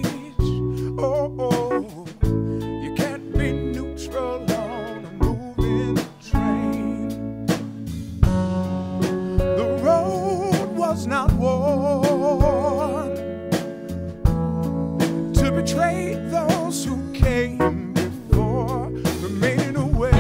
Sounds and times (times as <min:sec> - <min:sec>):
Music: 0:00.0 - 0:20.2.